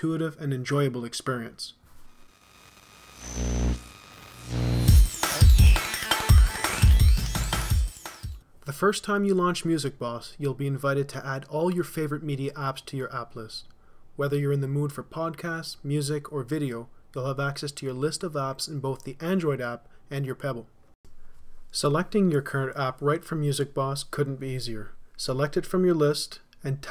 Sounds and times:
Speech: 0.0 - 1.8, 8.6 - 20.7, 21.7 - 26.9.

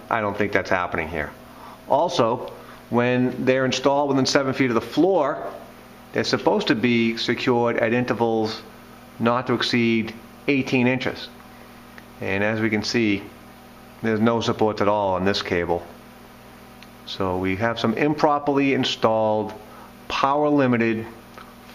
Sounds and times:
Speech: 0.0 - 11.4, 12.2 - 13.4, 14.0 - 16.0, 17.0 - 21.2.

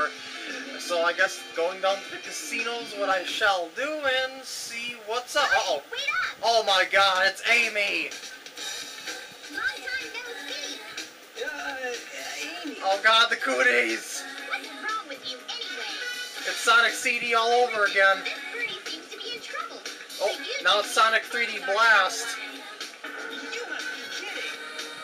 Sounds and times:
Music: 0.0 - 25.0.

